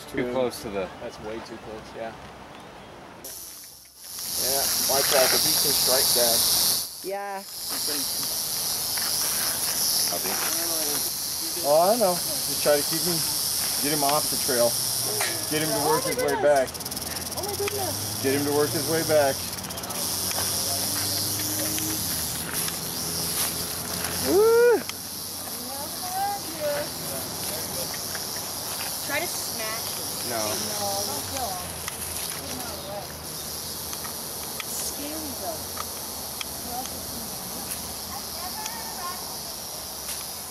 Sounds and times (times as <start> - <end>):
Snake: 3.2 - 40.5.